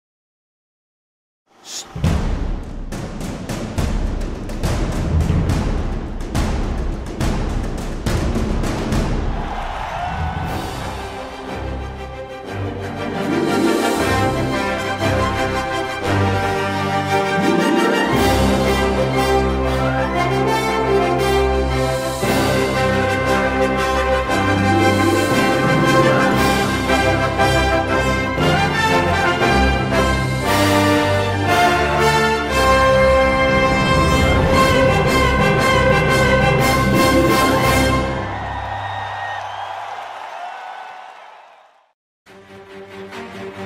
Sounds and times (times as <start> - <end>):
Music: 1.8 - 39.7, 42.3 - 43.6.